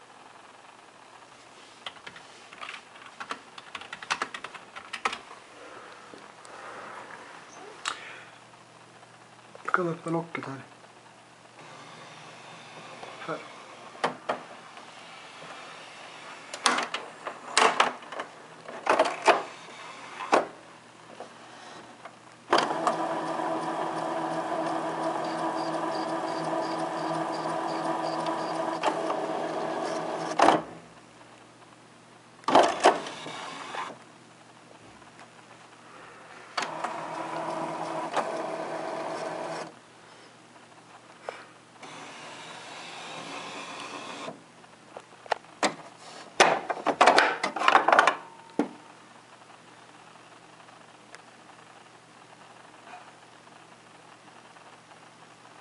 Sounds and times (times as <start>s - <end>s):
Printer: 11.6s - 18.0s, 18.8s - 20.6s, 22.5s - 30.8s, 32.5s - 34.0s, 36.6s - 39.8s, 41.8s - 44.4s.